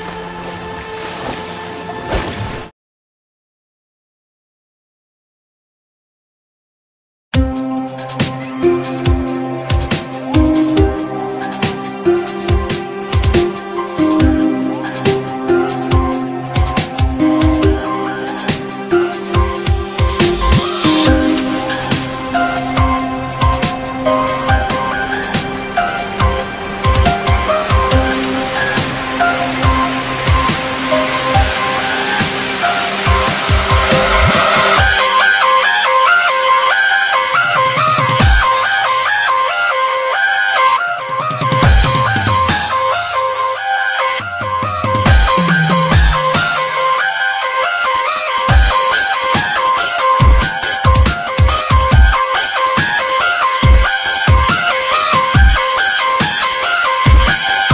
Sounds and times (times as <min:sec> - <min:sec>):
Electronic music: 0:07.4 - 0:57.7.